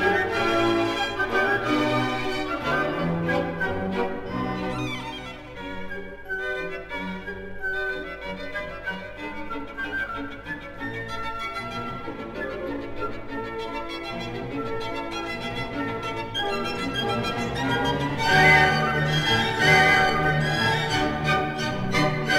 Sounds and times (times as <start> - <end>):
Violin, fiddle: 0.0 - 22.3.